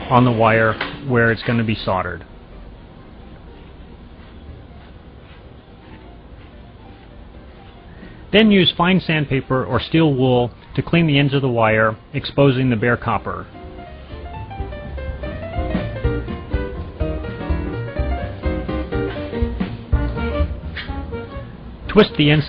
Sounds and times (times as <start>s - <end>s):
Narration, monologue: 0.0s - 2.5s, 8.2s - 13.6s, 21.8s - 22.4s
Music: 3.0s - 9.7s, 13.2s - 22.4s.